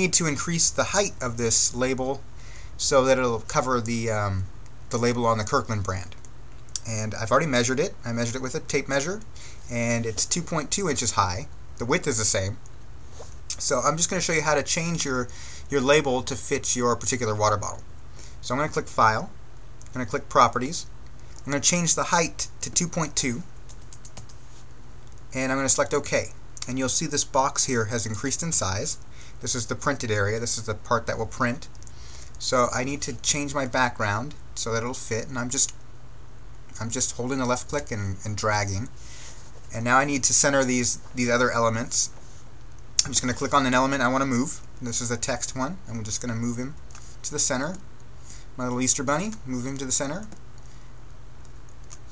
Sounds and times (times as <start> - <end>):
Speech: 0.0 - 2.2, 2.8 - 6.2, 6.8 - 12.6, 13.5 - 17.8, 18.4 - 23.5, 25.3 - 31.7, 32.4 - 35.8, 36.8 - 38.9, 39.7 - 42.2, 43.0 - 47.8, 48.6 - 50.4.